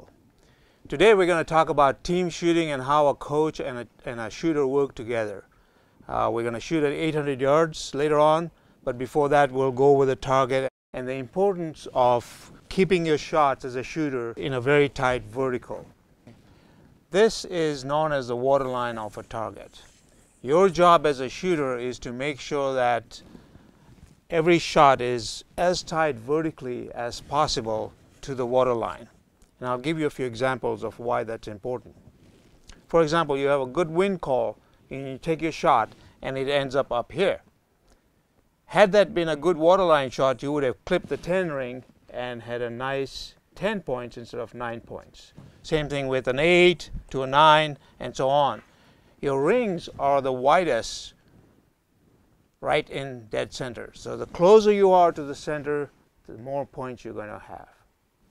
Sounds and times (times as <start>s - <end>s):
Speech: 0.9s - 15.9s, 17.1s - 23.2s, 24.3s - 32.0s, 32.9s - 37.5s, 38.7s - 48.6s, 49.2s - 51.2s, 52.6s - 57.9s.